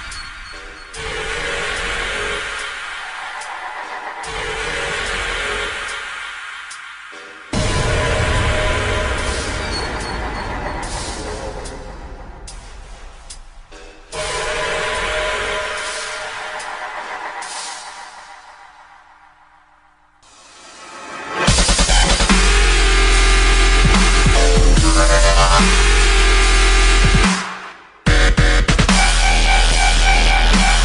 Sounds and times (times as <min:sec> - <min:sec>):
Theme music: 0:07.1 - 0:18.5, 0:20.2 - 0:27.5
Dance music: 0:21.4 - 0:30.8.